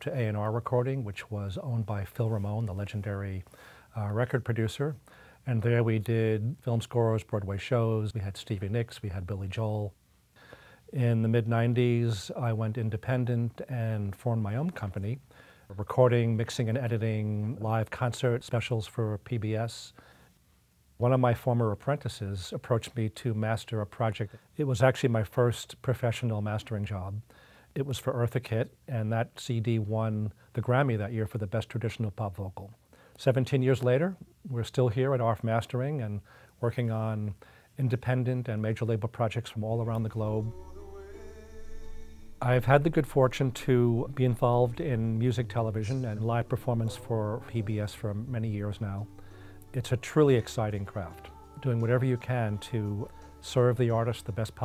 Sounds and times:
Speech: 0:00.0 - 0:10.0, 0:10.9 - 0:20.0, 0:21.0 - 0:40.6, 0:42.4 - 0:49.1, 0:49.7 - 0:54.6.

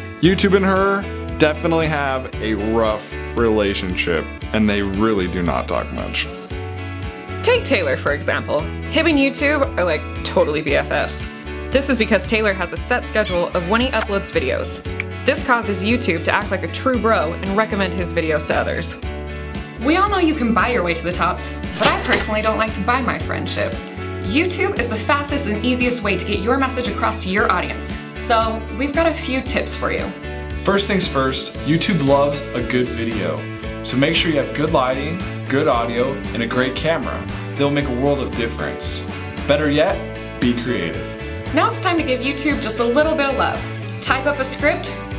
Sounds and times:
Music: 0:00.0 - 0:45.1
Speech: 0:00.2 - 0:00.8, 0:01.4 - 0:06.3, 0:07.5 - 0:11.2, 0:11.8 - 0:18.9, 0:19.8 - 0:21.4, 0:22.1 - 0:30.1, 0:30.7 - 0:44.9.

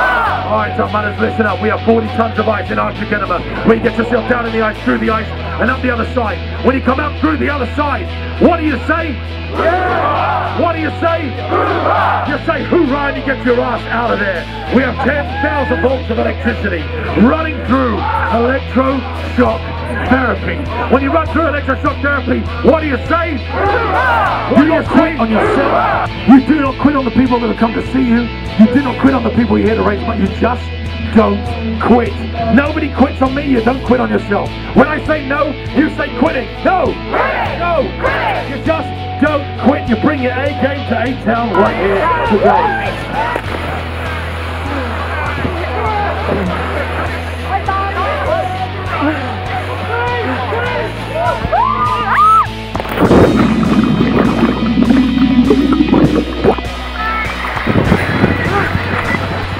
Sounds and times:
Music: 0:00.0 - 0:59.5
Outside, urban or manmade: 0:00.0 - 0:59.5
Speech: 0:00.4 - 0:09.2, 0:12.3 - 0:23.4, 0:24.5 - 0:42.9.

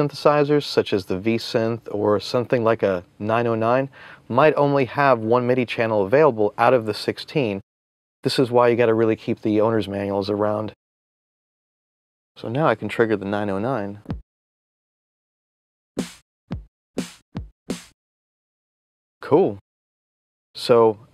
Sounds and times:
Speech: 0:00.0 - 0:07.6, 0:08.3 - 0:10.8, 0:12.4 - 0:14.1, 0:19.2 - 0:19.6, 0:20.6 - 0:21.1.

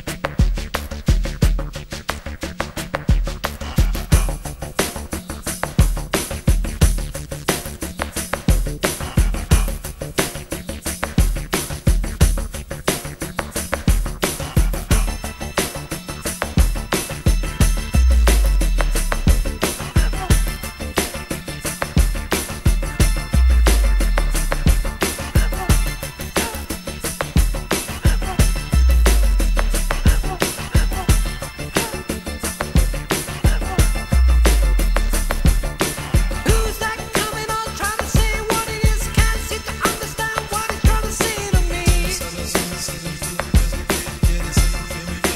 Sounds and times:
Electronica: 0:00.0 - 0:45.3.

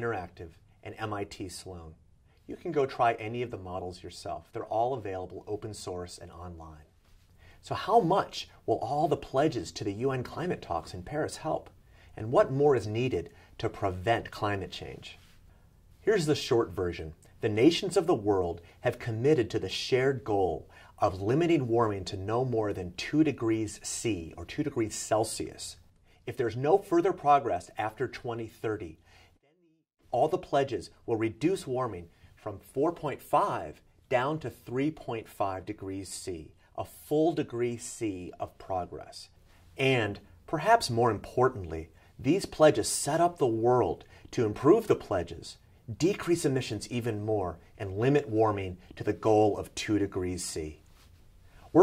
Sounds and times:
Speech: 0:00.0 - 0:07.0, 0:07.6 - 0:15.2, 0:16.0 - 0:50.8.

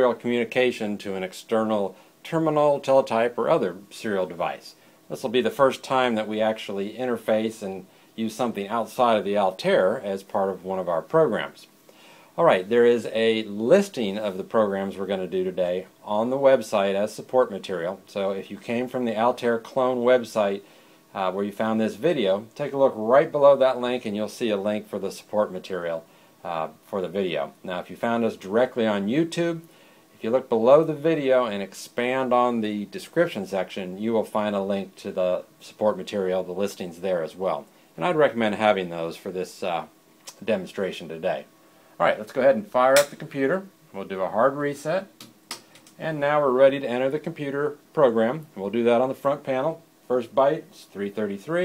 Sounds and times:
Speech: 0:00.0 - 0:11.8, 0:12.4 - 0:45.2, 0:46.0 - 0:51.6.

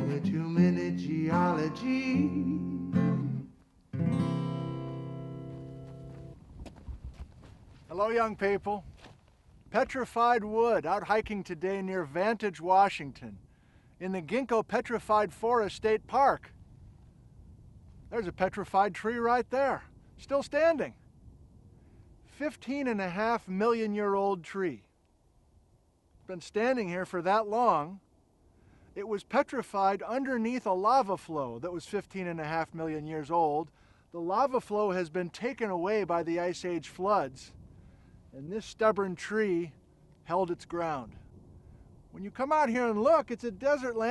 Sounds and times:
Speech: 0:07.9 - 0:08.9, 0:09.7 - 0:13.4, 0:14.0 - 0:16.5, 0:18.1 - 0:21.0, 0:22.3 - 0:24.9, 0:26.3 - 0:28.0, 0:29.0 - 0:37.6, 0:38.4 - 0:41.2, 0:42.2 - 0:44.1.

